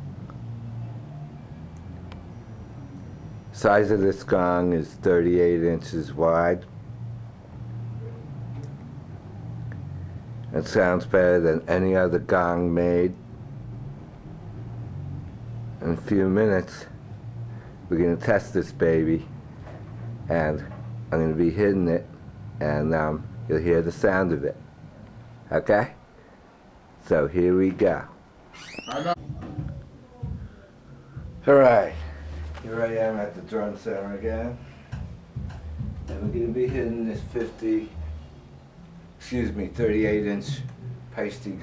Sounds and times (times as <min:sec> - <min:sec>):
Speech: 0:03.6 - 0:06.7, 0:10.5 - 0:13.2, 0:15.8 - 0:17.0, 0:17.9 - 0:19.3, 0:20.3 - 0:24.6, 0:25.5 - 0:26.0, 0:27.0 - 0:28.2, 0:28.9 - 0:30.8, 0:31.4 - 0:34.7, 0:36.1 - 0:38.0, 0:39.2 - 0:41.6.